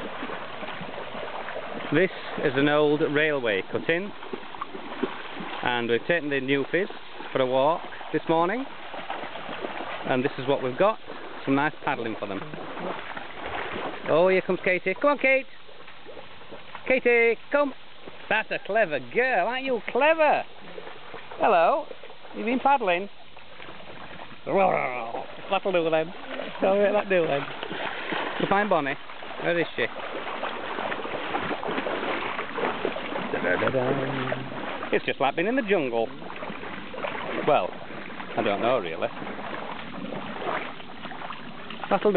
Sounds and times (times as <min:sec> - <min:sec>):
Speech: 0:16.9 - 0:20.5.